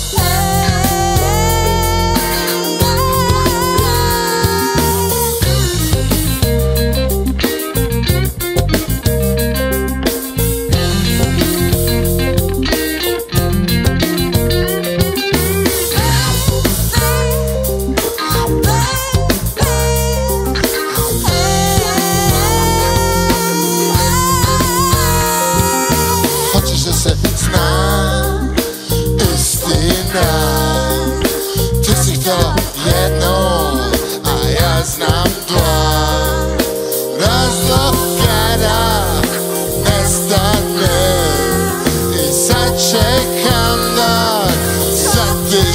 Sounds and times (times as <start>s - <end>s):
Ska: 0.0s - 45.7s
Song: 0.0s - 45.7s.